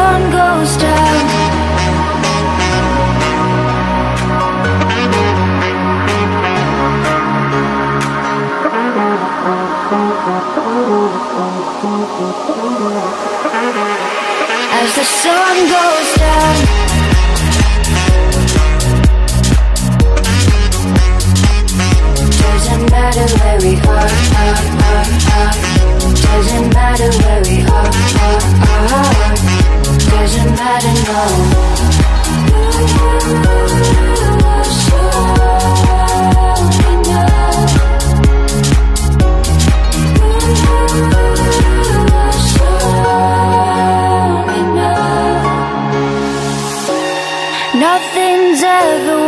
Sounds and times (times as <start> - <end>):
Singing: 0.0 - 5.4, 8.5 - 18.1, 22.3 - 38.2, 40.2 - 46.0
House music: 0.0 - 49.2.